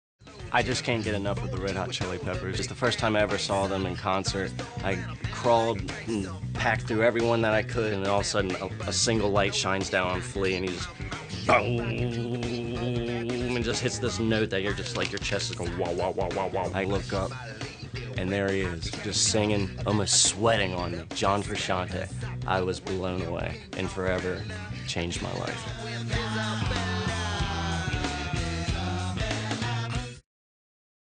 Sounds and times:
Music: 0.2 - 30.2
Speech: 0.5 - 17.4, 18.2 - 25.7.

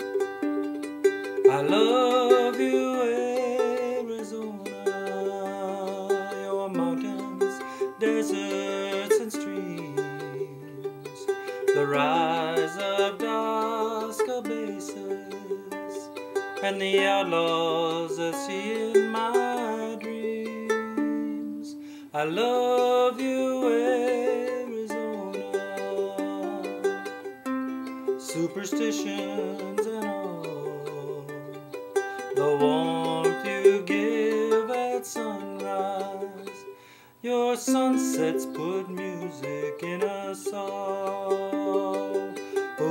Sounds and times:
Inside, small room: 0.0 - 42.9
Ukulele: 0.0 - 42.9.

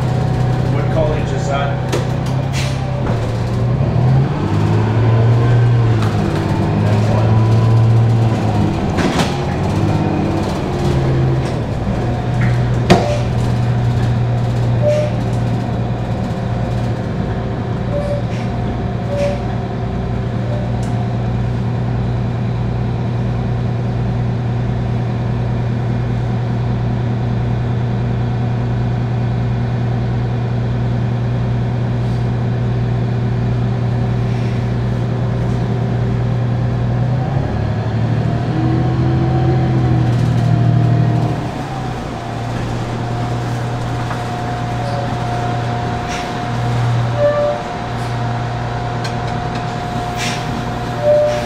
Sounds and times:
Vehicle: 0.0 - 51.4.

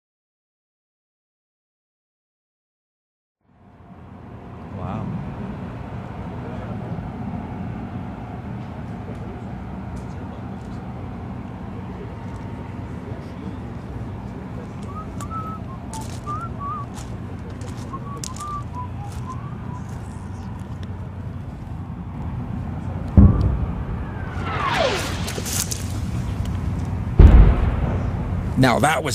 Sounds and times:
Field recording: 3.4 - 29.1
Speech: 4.7 - 5.2, 11.7 - 19.2, 28.6 - 29.1.

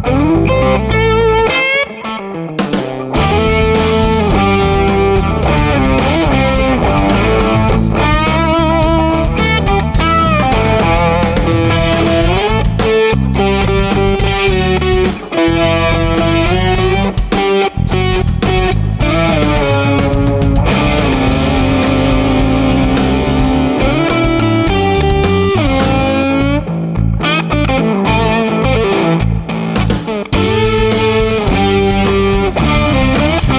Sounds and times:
Electric guitar: 0.0 - 33.5.

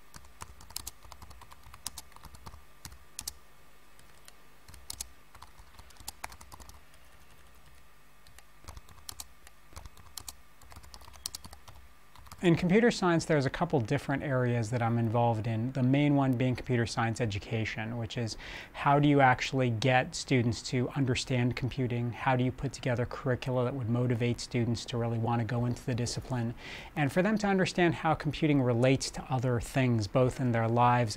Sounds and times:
Speech: 12.4 - 31.1.

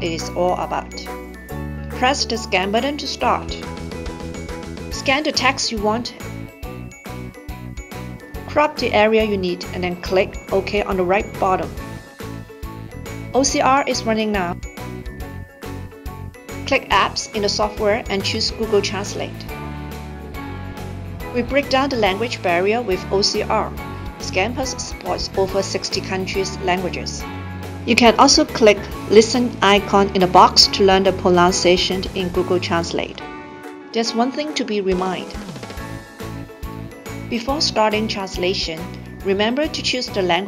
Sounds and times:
Speech: 0.0 - 1.1, 2.0 - 3.6, 5.0 - 6.2, 8.5 - 11.8, 13.4 - 14.6, 16.7 - 19.4, 21.4 - 27.2, 27.9 - 33.2, 34.0 - 35.4, 37.3 - 40.4
Music: 0.0 - 40.4.

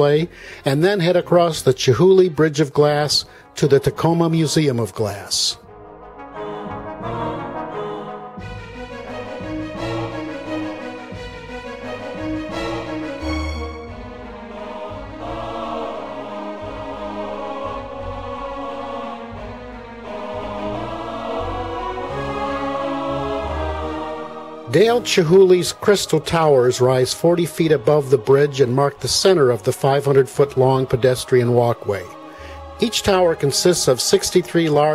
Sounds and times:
Music: 0.0 - 34.9.

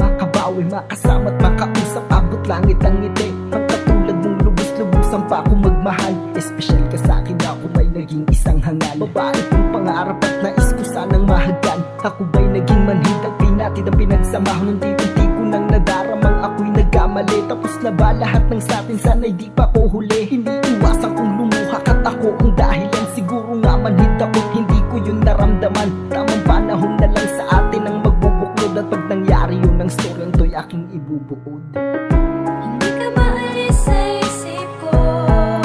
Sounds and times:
Music: 0.0 - 35.6.

